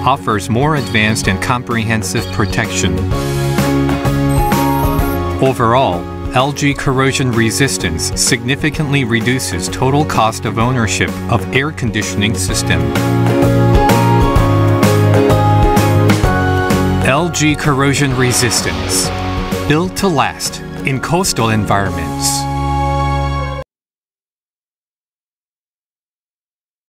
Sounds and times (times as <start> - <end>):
Speech: 0.0 - 3.1, 5.4 - 13.0, 17.0 - 19.1, 19.7 - 22.5
Music: 0.0 - 23.7.